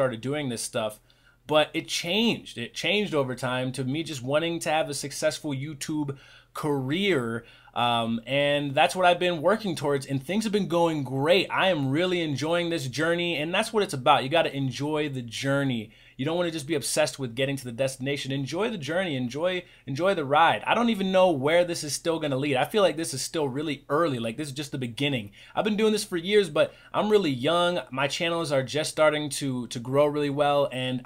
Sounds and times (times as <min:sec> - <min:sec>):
Speech: 0:00.0 - 0:31.0.